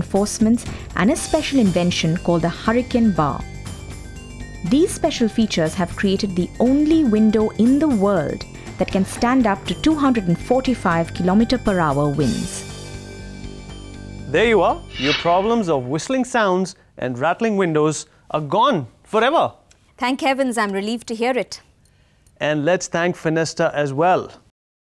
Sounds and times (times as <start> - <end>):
Music: 0.0 - 16.4
Speech: 14.3 - 19.6.